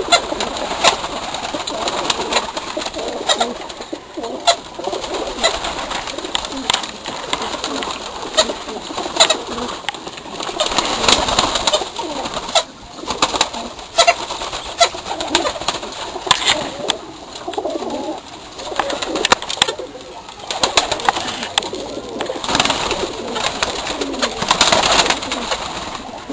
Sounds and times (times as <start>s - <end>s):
Coo: 0.0s - 9.9s, 10.5s - 14.2s, 14.8s - 15.6s, 16.2s - 26.3s.